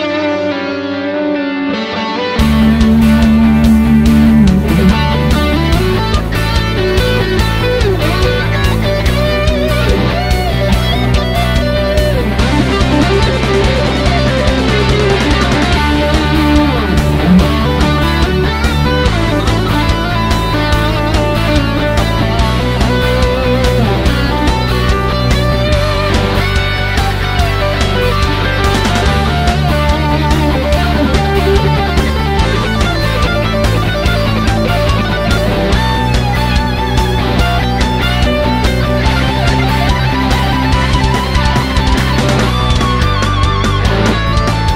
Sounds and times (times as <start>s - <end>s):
Bass guitar: 0.0s - 44.7s
Electric guitar: 0.0s - 44.7s
Strum: 0.0s - 44.7s.